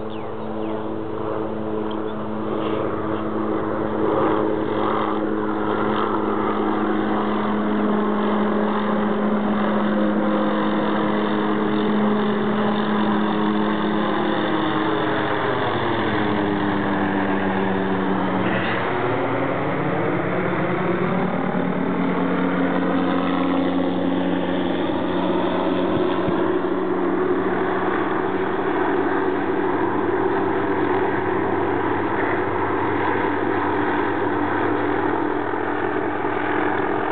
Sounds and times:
Helicopter: 0:00.0 - 0:37.1.

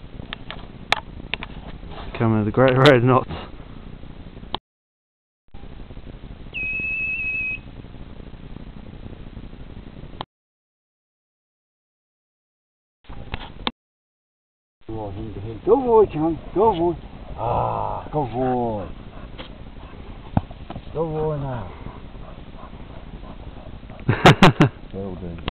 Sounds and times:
Speech: 0:02.1 - 0:03.4, 0:14.9 - 0:18.9, 0:20.9 - 0:21.8, 0:24.9 - 0:25.5.

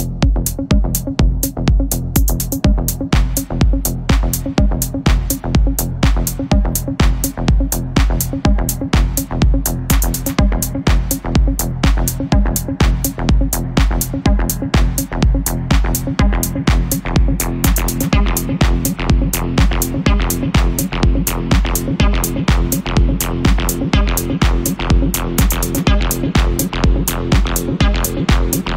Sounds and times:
Techno: 0:00.0 - 0:28.7.

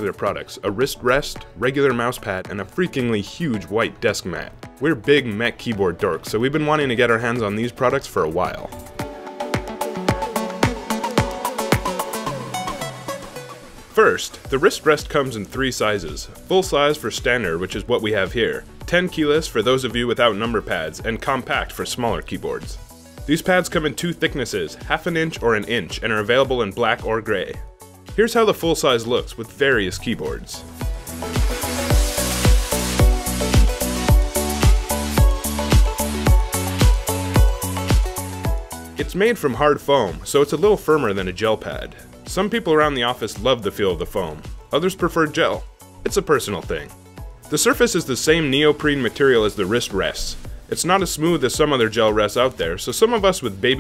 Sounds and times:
Speech: 0:00.0 - 0:08.8, 0:14.0 - 0:27.6, 0:28.2 - 0:30.7, 0:39.0 - 0:53.8
Music: 0:00.0 - 0:53.8.

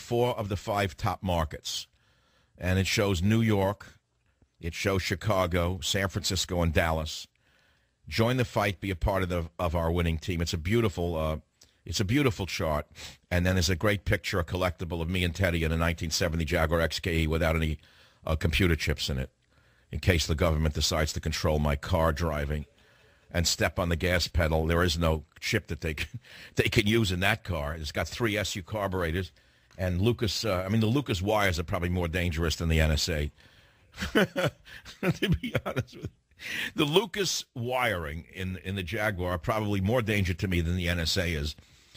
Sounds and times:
Speech: 0:00.0 - 0:02.0, 0:02.6 - 0:04.0, 0:04.6 - 0:07.4, 0:08.1 - 0:22.7, 0:23.3 - 0:33.4, 0:34.0 - 0:41.6.

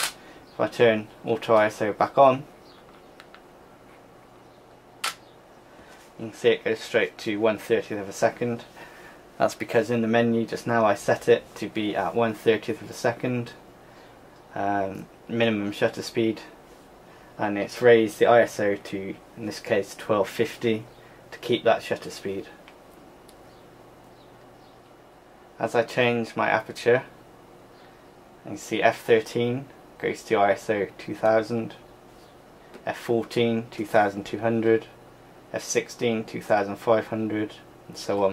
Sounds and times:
Speech: 0:00.6 - 0:02.5, 0:06.2 - 0:08.7, 0:09.4 - 0:13.6, 0:14.5 - 0:16.6, 0:17.4 - 0:22.6, 0:25.6 - 0:27.2, 0:28.4 - 0:31.8, 0:32.8 - 0:38.3.

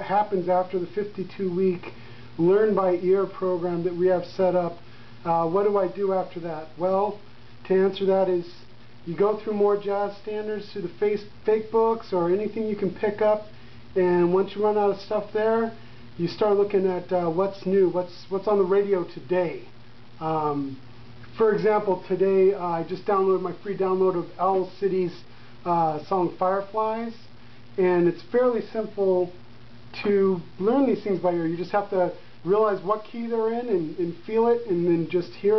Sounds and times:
Speech: 0:00.0 - 0:35.5.

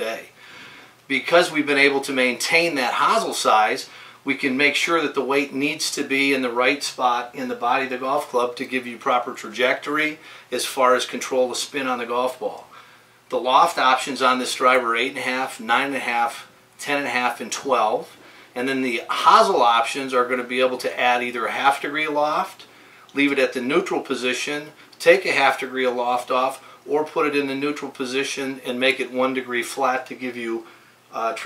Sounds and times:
Speech: 0:00.0 - 0:00.4, 0:01.1 - 0:12.7, 0:13.3 - 0:31.4.

